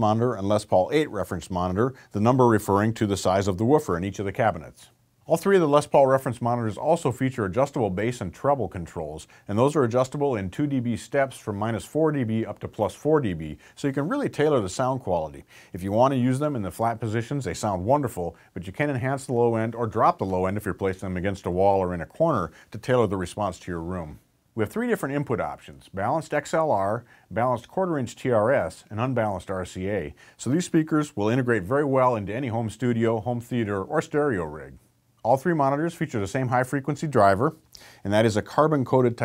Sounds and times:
Speech: 0.0s - 39.2s.

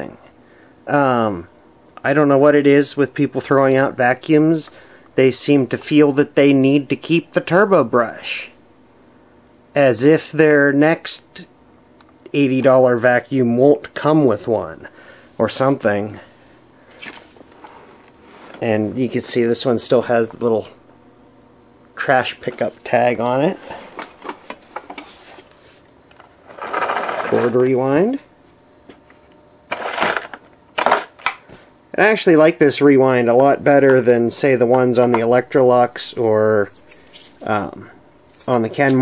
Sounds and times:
Speech: 0.0s - 0.3s, 0.9s - 8.6s, 9.8s - 11.5s, 12.2s - 16.3s, 18.6s - 20.8s, 22.0s - 23.7s, 27.2s - 28.3s, 31.9s - 36.8s, 37.4s - 39.0s.

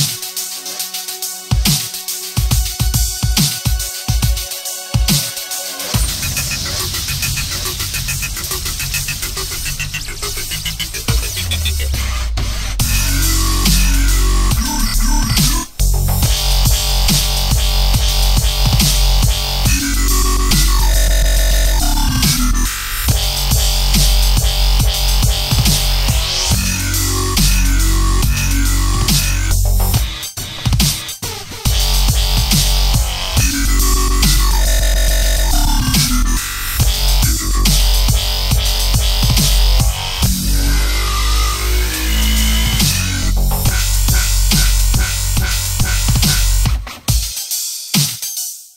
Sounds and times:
Music: 0.0s - 48.7s.

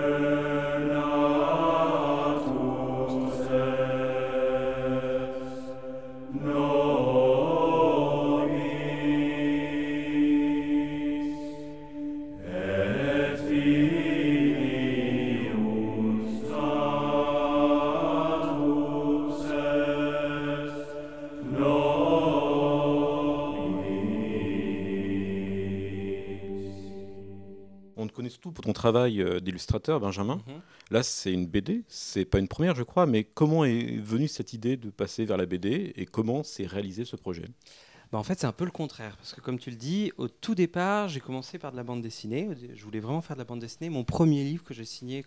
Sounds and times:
Speech: 28.0s - 37.6s, 38.2s - 45.2s.

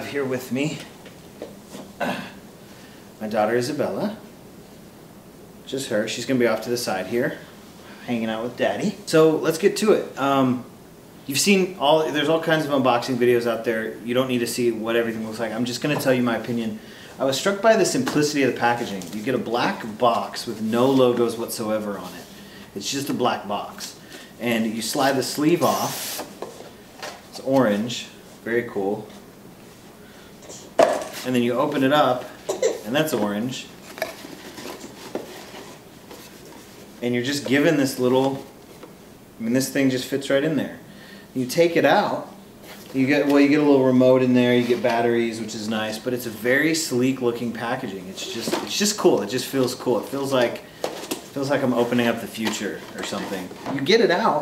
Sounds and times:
Speech: 0.0s - 1.0s, 3.2s - 4.3s, 5.7s - 7.4s, 8.0s - 10.7s, 11.3s - 26.1s, 27.4s - 29.2s, 31.2s - 33.8s, 37.0s - 38.5s, 39.4s - 40.8s, 41.4s - 50.7s, 51.3s - 54.4s.

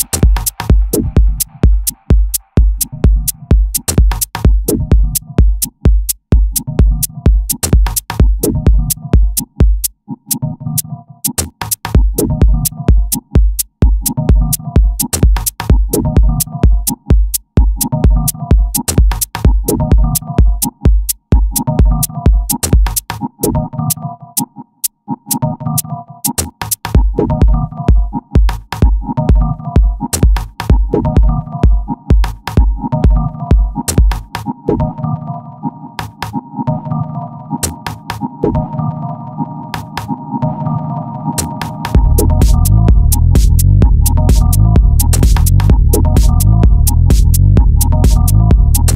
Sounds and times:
Techno: 0.0s - 24.6s, 25.3s - 48.9s.

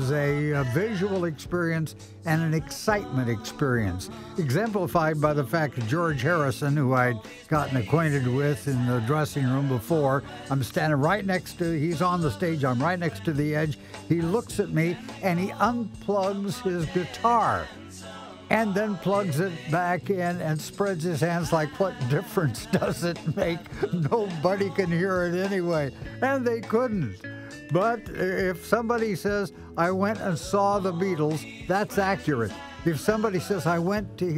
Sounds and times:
Speech: 0.0s - 17.7s, 18.5s - 34.3s
Music: 0.0s - 34.3s.

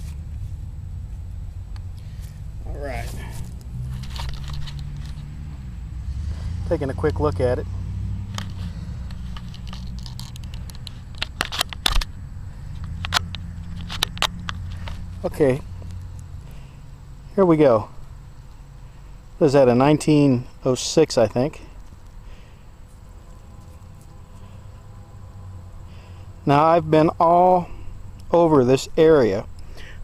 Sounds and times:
Speech: 2.6s - 3.3s, 6.6s - 7.6s, 15.2s - 15.6s, 17.4s - 17.9s, 19.4s - 21.7s, 26.5s - 27.7s, 28.3s - 29.5s.

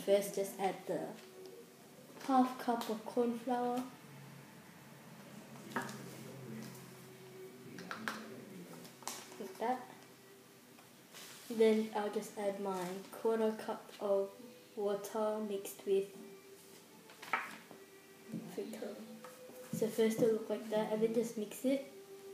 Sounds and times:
Speech: 0.0s - 1.2s, 2.2s - 3.9s, 9.4s - 10.0s, 11.5s - 16.2s, 18.4s - 21.9s.

